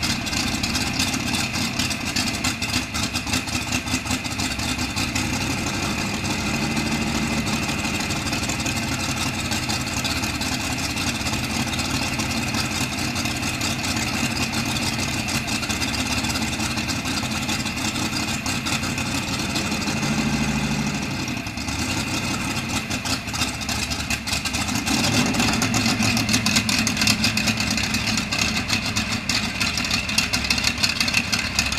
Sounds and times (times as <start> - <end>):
Idling: 0.0 - 31.7
Medium engine (mid frequency): 0.0 - 31.7
Vehicle: 0.0 - 31.7.